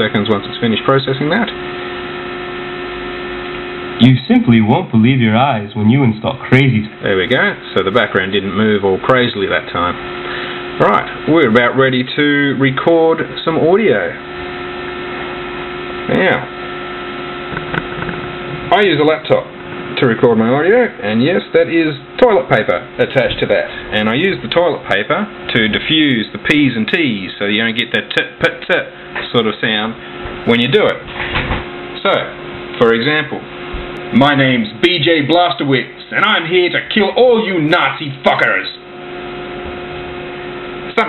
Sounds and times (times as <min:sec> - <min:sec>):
Speech: 0:00.0 - 0:01.6, 0:04.0 - 0:10.0, 0:10.8 - 0:14.2, 0:16.1 - 0:16.5, 0:18.7 - 0:31.1, 0:32.0 - 0:33.5, 0:34.1 - 0:38.8, 0:40.9 - 0:41.0.